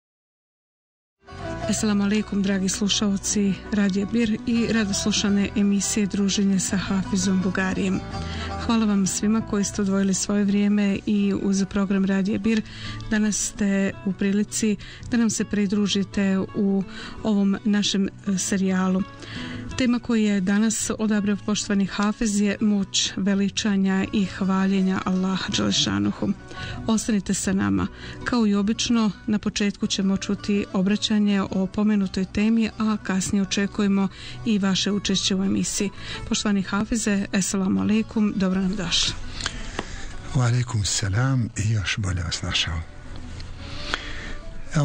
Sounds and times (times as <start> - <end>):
Music: 1.2 - 44.8
Speech: 1.7 - 8.0, 8.6 - 19.0, 19.8 - 39.2, 40.3 - 42.9.